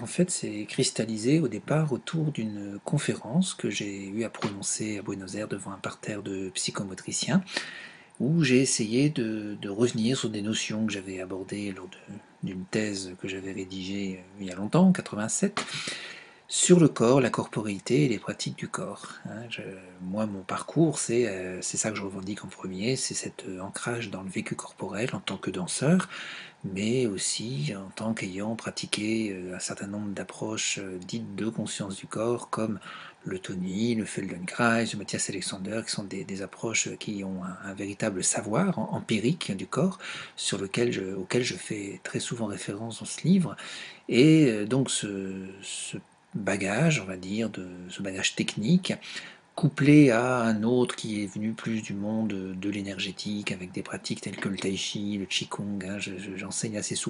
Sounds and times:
Speech: 0:00.0 - 0:07.6, 0:08.2 - 0:15.8, 0:16.5 - 0:57.1.

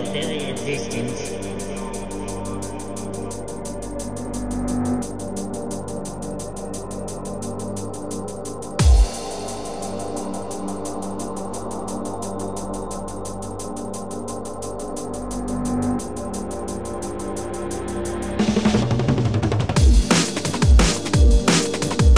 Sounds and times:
Music: 0:00.0 - 0:22.1.

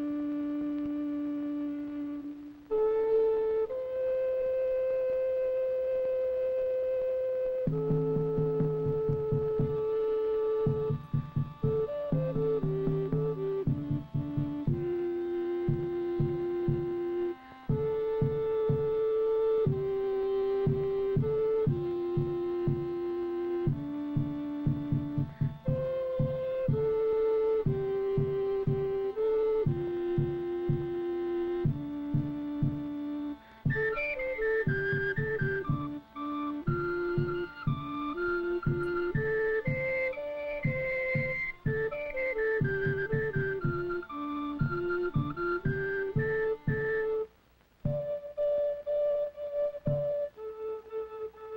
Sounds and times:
Music: 0:00.0 - 0:51.5.

